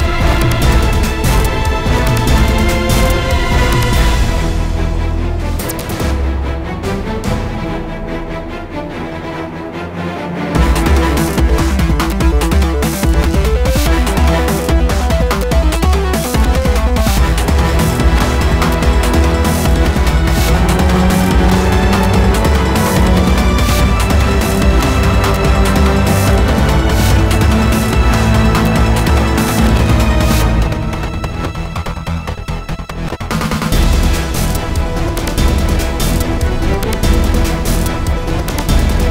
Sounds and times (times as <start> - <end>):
Soundtrack music: 0.0 - 39.1.